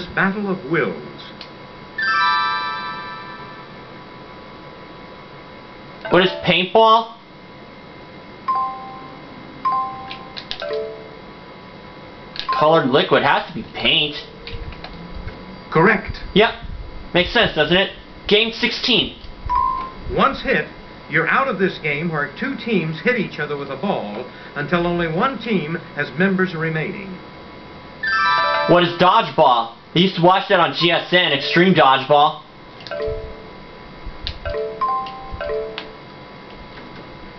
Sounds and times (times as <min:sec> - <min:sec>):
Speech: 0:00.0 - 0:01.4, 0:06.1 - 0:07.2, 0:12.5 - 0:14.3, 0:15.8 - 0:19.2, 0:20.1 - 0:27.2, 0:28.7 - 0:32.5.